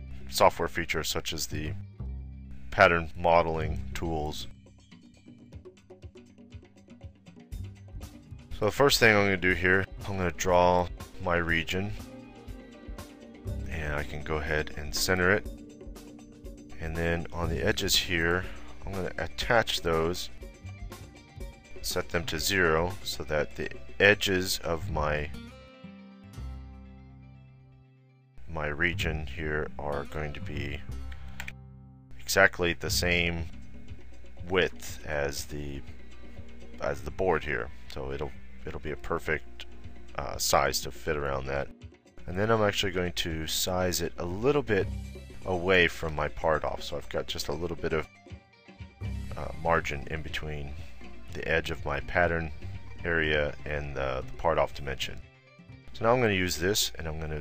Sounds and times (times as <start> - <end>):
Music: 0.0 - 57.4
Speech: 0.3 - 1.8, 2.7 - 4.5, 8.6 - 12.0, 13.7 - 15.5, 16.8 - 20.4, 21.8 - 25.4, 28.4 - 30.9, 32.2 - 33.5, 34.4 - 35.8, 36.8 - 44.9, 45.5 - 48.1, 49.3 - 50.8, 51.4 - 55.2, 55.9 - 57.4.